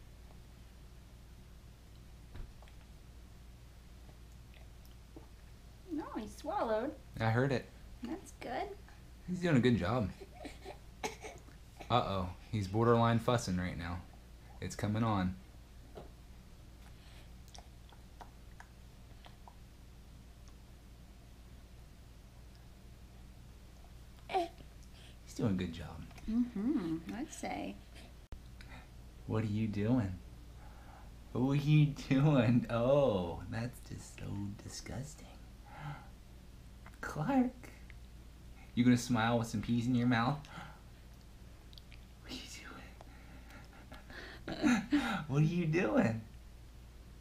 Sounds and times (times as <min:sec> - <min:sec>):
Inside, small room: 0:00.0 - 0:47.2.